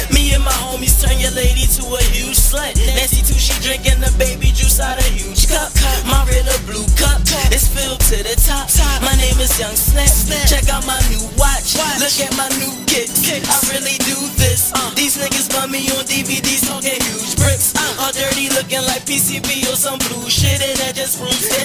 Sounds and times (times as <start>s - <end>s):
Music: 0.0s - 21.6s
Rapping: 0.0s - 21.6s.